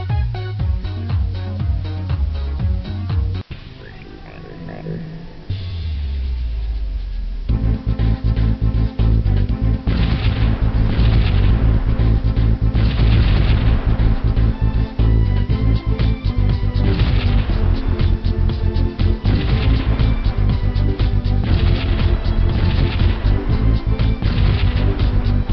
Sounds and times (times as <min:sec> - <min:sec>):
Music: 0:00.0 - 0:25.5.